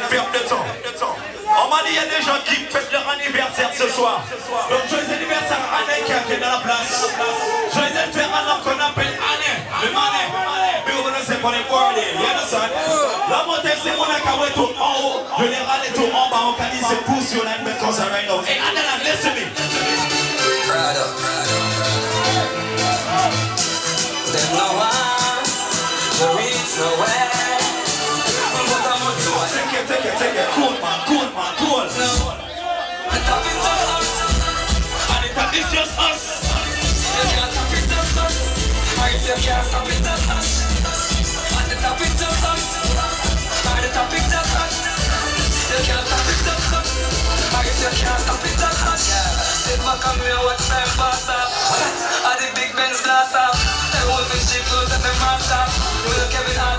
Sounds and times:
Speech: 0.0s - 21.6s, 24.2s - 27.7s, 28.3s - 33.9s, 35.1s - 37.8s
Music: 18.6s - 32.4s, 33.0s - 56.7s.

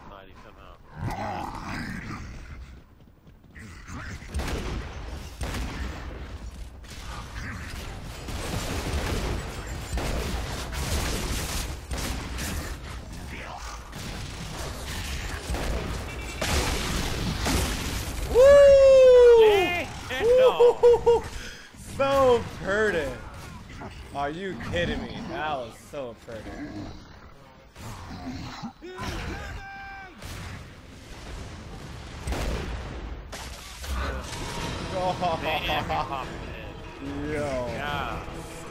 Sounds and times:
Speech: 0.0s - 0.8s, 21.9s - 23.3s, 24.1s - 26.8s.

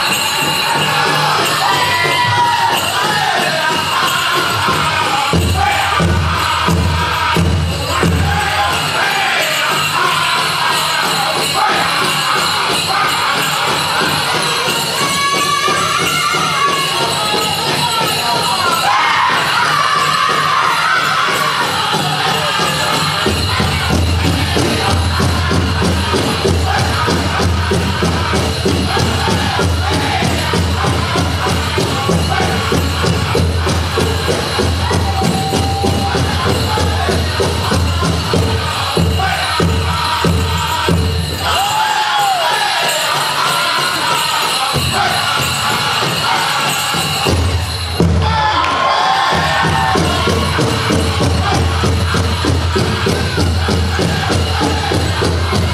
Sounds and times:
Music: 0.0s - 55.7s
Speech: 13.0s - 23.8s.

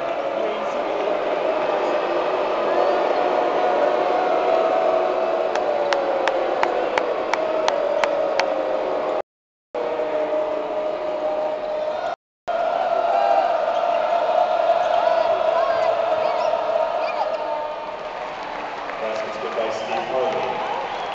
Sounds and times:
Cheering: 0.0s - 9.2s, 9.8s - 21.1s
Crowd: 0.0s - 9.2s, 9.8s - 21.1s.

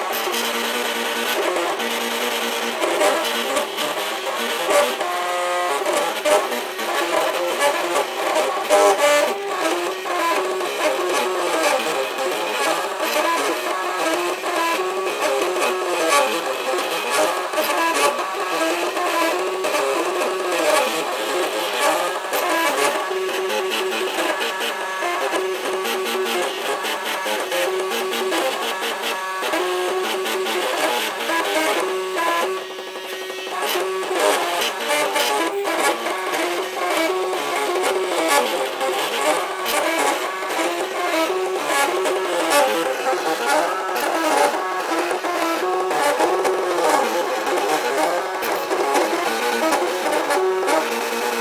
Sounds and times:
Printer: 0.0s - 51.4s.

